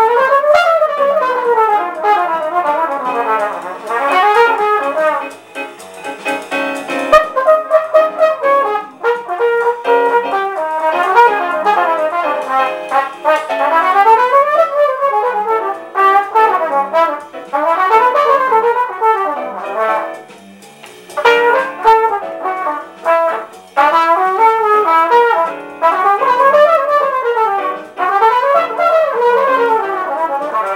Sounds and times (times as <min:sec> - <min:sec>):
Trumpet: 0:00.0 - 0:30.7.